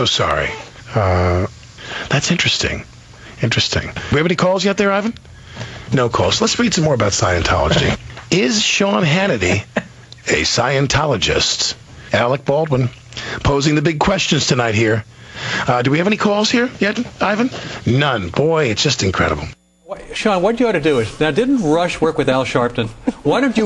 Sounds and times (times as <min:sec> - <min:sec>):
Speech: 0:00.0 - 0:01.5, 0:02.1 - 0:05.2, 0:05.9 - 0:15.0, 0:15.6 - 0:23.6.